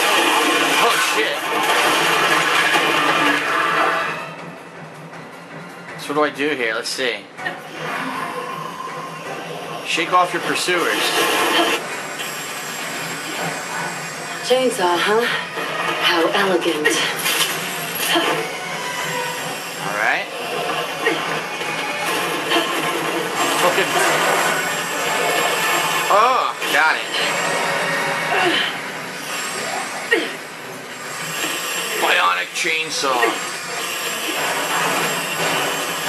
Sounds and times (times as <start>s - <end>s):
Television: 0.0s - 36.0s.